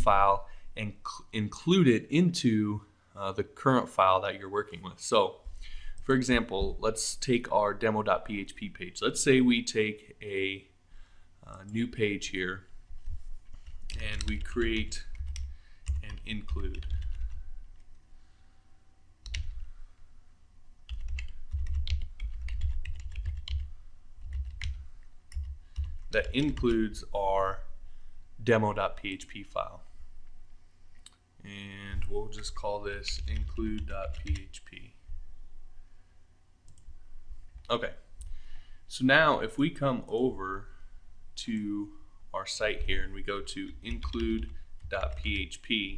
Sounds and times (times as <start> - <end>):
Speech: 0.0 - 5.4, 6.0 - 10.7, 11.4 - 12.7, 13.9 - 15.1, 16.0 - 17.0, 26.2 - 27.7, 28.4 - 29.9, 31.4 - 35.0, 37.7 - 38.1, 38.9 - 40.7, 41.4 - 45.9.